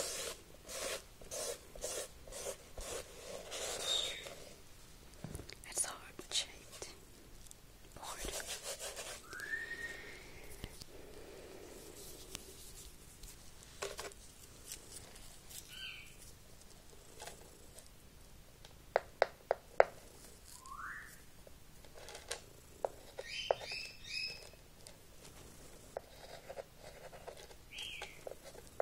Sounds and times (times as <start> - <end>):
Rub: 0.0 - 4.5, 8.2 - 9.3.